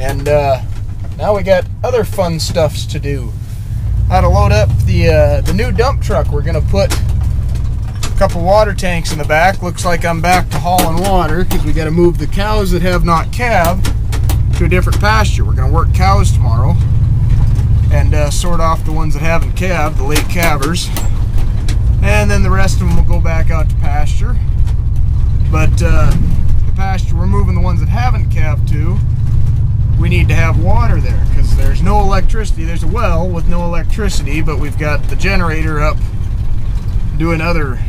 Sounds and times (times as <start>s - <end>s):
Speech: 0.0s - 3.4s, 4.1s - 7.0s, 8.2s - 13.9s, 14.6s - 16.8s, 17.9s - 21.0s, 22.0s - 24.4s, 25.5s - 29.0s, 30.0s - 36.0s, 37.1s - 37.8s
Car: 0.0s - 37.8s.